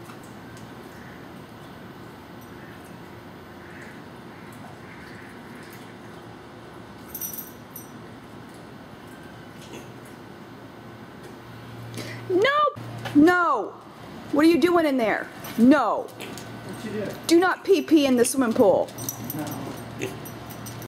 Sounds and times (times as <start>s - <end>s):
Oink: 20.0s - 20.2s.